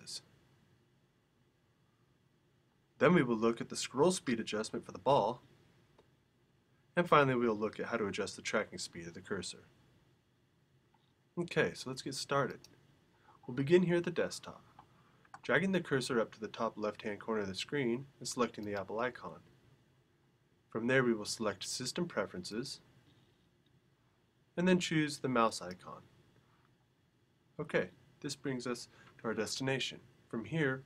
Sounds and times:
Speech: 0.0 - 0.3, 3.0 - 5.4, 7.0 - 9.7, 11.4 - 12.7, 13.5 - 14.7, 15.4 - 19.5, 20.7 - 22.9, 24.6 - 26.1, 27.6 - 30.8.

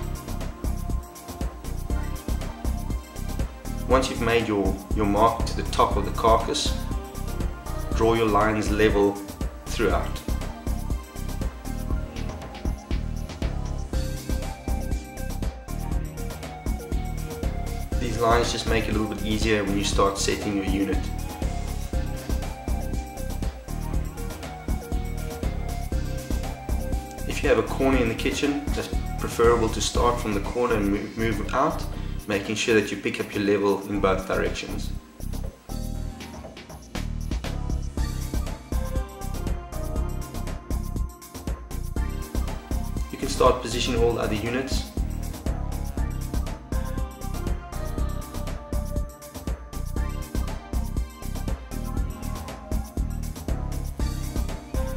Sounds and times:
Music: 0.0 - 54.9
Speech: 3.9 - 6.8, 7.9 - 10.3, 18.0 - 21.1, 27.3 - 35.0, 43.1 - 45.0.

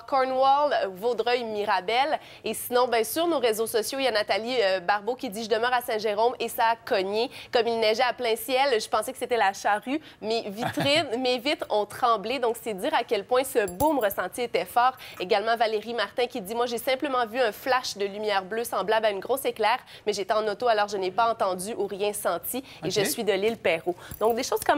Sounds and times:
Speech: 10.4 - 13.0, 22.8 - 24.7.

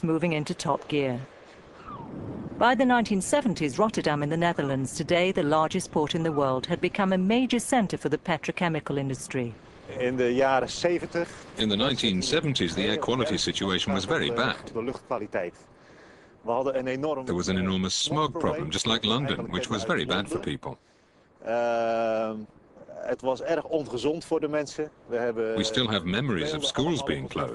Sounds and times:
Speech: 16.5 - 20.8, 21.4 - 27.5.

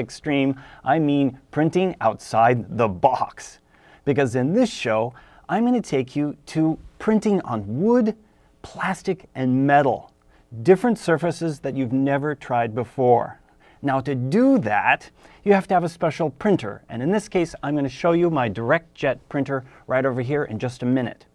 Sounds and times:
Speech: 0.0 - 21.3.

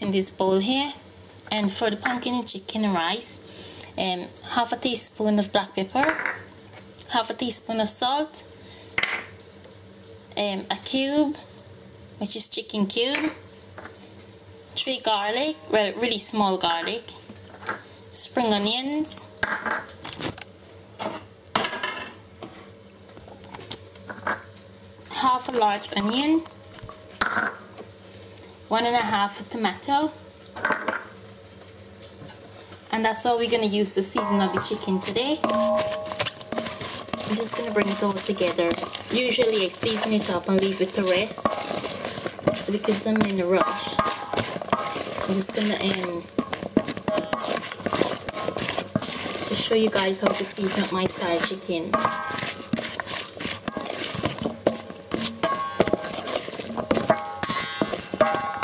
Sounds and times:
Speech: 0.0 - 3.4, 4.0 - 6.2, 7.1 - 8.4, 10.4 - 11.4, 12.2 - 13.4, 14.8 - 17.2, 18.2 - 19.3, 25.1 - 26.5, 28.7 - 30.2, 32.9 - 35.5, 37.2 - 41.5, 42.6 - 44.0, 45.3 - 46.3, 49.5 - 52.0.

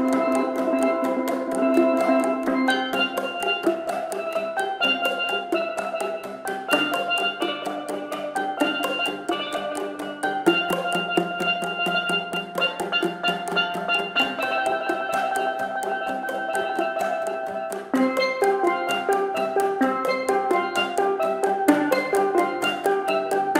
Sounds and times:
Marimba, xylophone: 0.0 - 23.5.

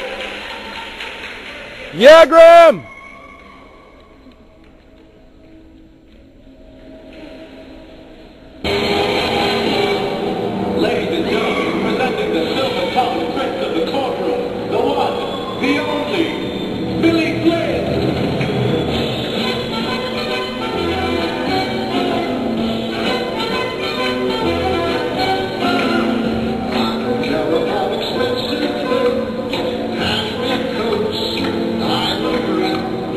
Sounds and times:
Music: 4.3 - 33.1.

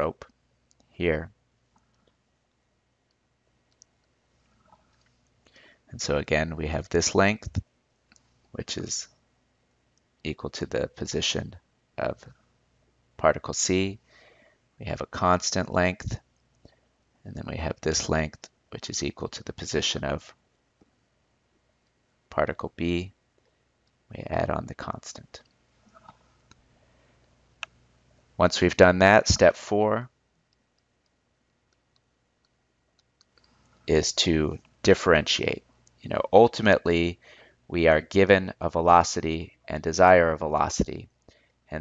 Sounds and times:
Speech: 0.0 - 1.4, 5.9 - 7.7, 8.5 - 9.1, 10.2 - 12.4, 13.2 - 14.0, 14.8 - 16.2, 17.2 - 20.4, 22.3 - 23.2, 24.1 - 25.4, 28.4 - 30.2, 33.9 - 41.1.

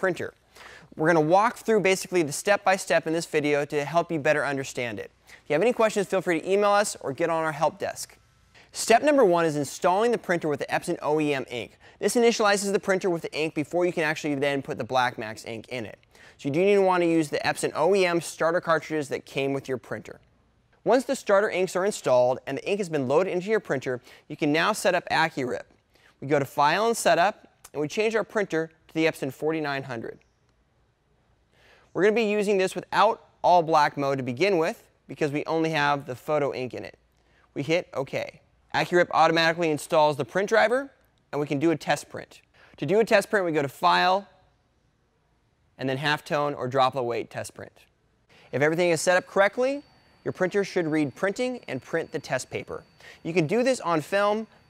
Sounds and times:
Speech: 0.0 - 0.4, 1.0 - 8.2, 8.8 - 20.2, 20.8 - 30.2, 32.0 - 37.0, 37.6 - 44.4, 45.8 - 47.9, 48.5 - 54.5.

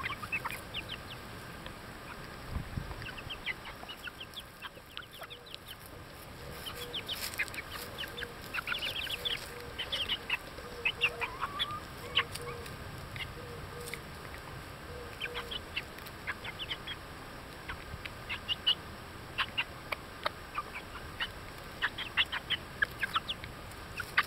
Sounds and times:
Bird: 0.0 - 1.2, 2.0 - 18.8, 19.4 - 24.2
Chicken, rooster: 0.0 - 1.2, 2.0 - 24.2.

